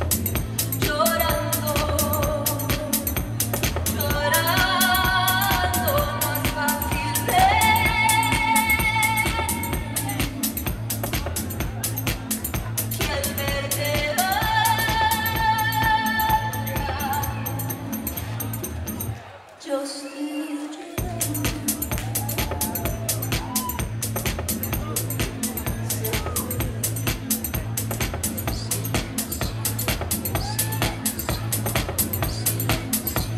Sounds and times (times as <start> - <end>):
Music: 0.0 - 19.4, 20.4 - 33.3
Crowd: 0.0 - 33.3.